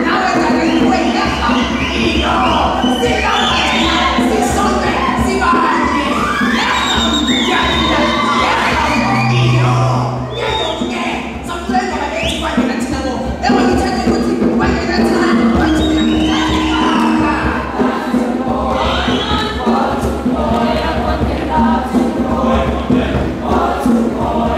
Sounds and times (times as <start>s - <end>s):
Speech: 0.0s - 17.7s
Music: 0.0s - 24.5s.